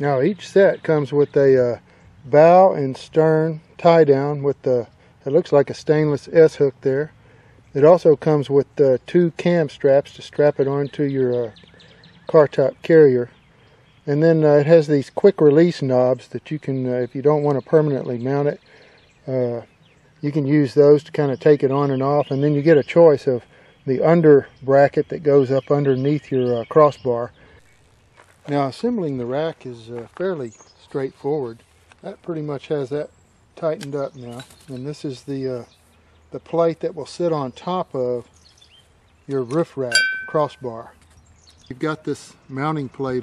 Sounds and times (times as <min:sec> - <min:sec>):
Speech: 0:00.0 - 0:07.1, 0:07.8 - 0:11.6, 0:12.3 - 0:13.3, 0:14.1 - 0:18.6, 0:19.3 - 0:27.3, 0:28.5 - 0:35.7, 0:36.4 - 0:38.3, 0:39.3 - 0:41.0, 0:41.7 - 0:43.2.